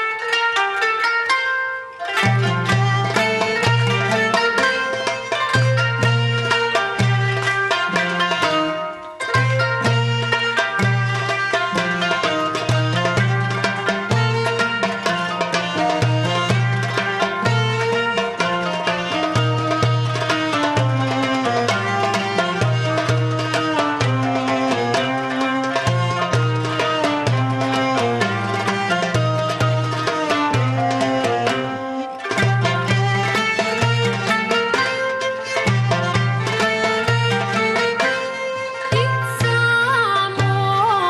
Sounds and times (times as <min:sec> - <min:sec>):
Music: 0:00.0 - 0:41.1.